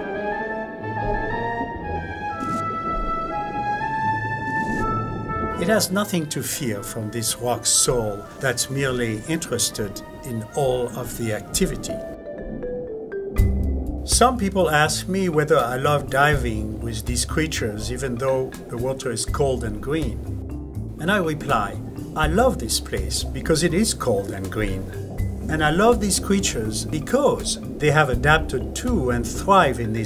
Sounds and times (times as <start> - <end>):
Music: 0.0 - 30.0
Speech: 5.6 - 11.9, 14.1 - 20.2, 21.0 - 24.9, 25.5 - 30.0.